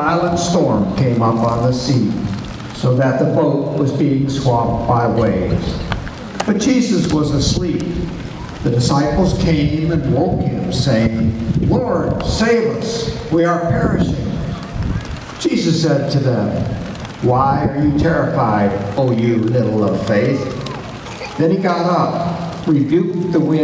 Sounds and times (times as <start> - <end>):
Male speech, man speaking: 0.0 - 2.2, 2.8 - 5.9, 6.5 - 8.0, 8.6 - 14.4, 15.4 - 20.6, 21.4 - 23.6.